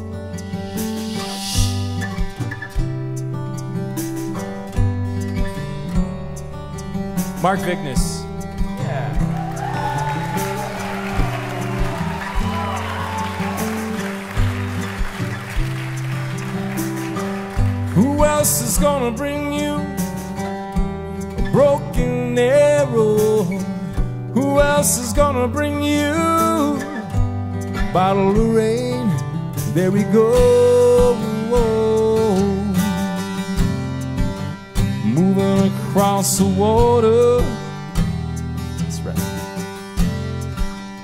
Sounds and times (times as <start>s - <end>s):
Music: 0.0s - 41.0s.